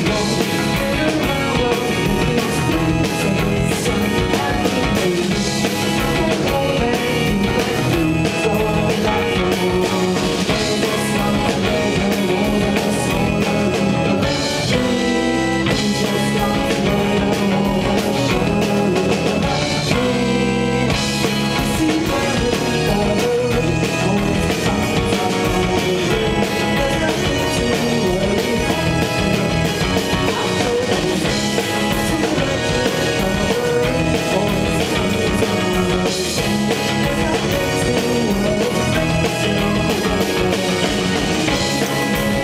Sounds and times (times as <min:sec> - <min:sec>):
Music: 0:00.0 - 0:42.4.